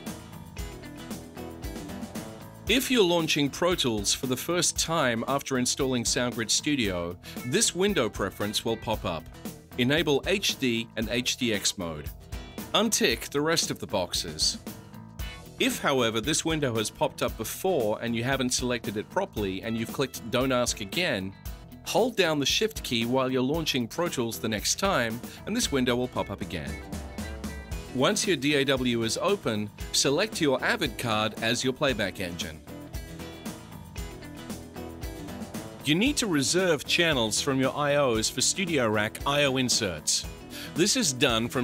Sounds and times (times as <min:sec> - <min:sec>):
Music: 0:00.0 - 0:41.6
Speech: 0:02.7 - 0:12.1, 0:12.7 - 0:14.6, 0:15.6 - 0:26.8, 0:27.9 - 0:32.6, 0:35.9 - 0:41.6.